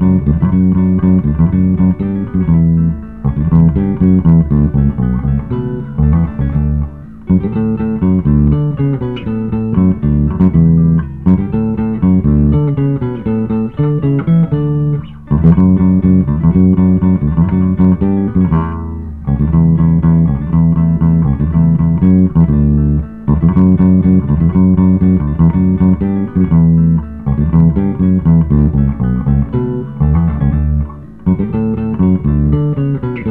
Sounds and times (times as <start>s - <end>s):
Bass guitar: 0.0s - 33.3s.